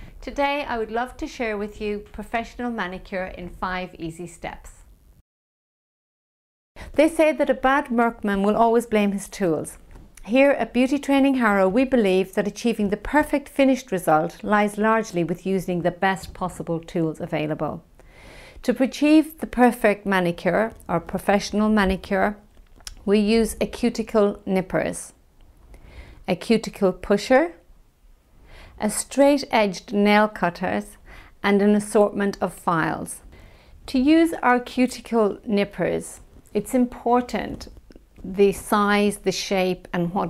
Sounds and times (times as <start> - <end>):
Speech: 0.2 - 4.9, 7.0 - 17.8, 18.6 - 25.2, 26.3 - 27.6, 28.8 - 33.3, 33.9 - 40.2.